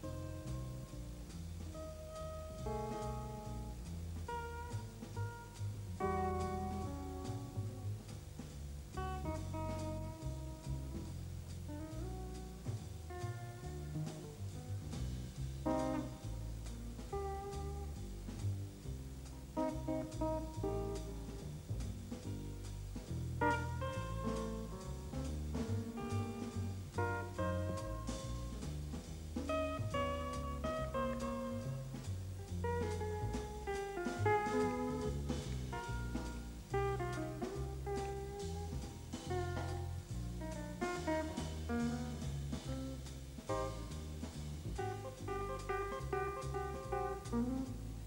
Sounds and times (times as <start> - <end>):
Music: 0.0 - 48.0.